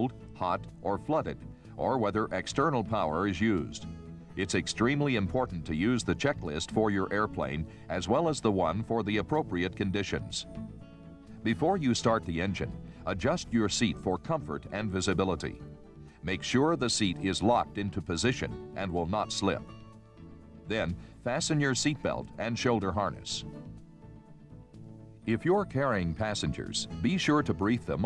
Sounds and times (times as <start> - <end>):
Speech: 0.0 - 3.8, 4.4 - 10.5, 11.4 - 15.6, 16.2 - 19.7, 20.7 - 23.5, 25.3 - 28.0
Music: 0.0 - 28.0.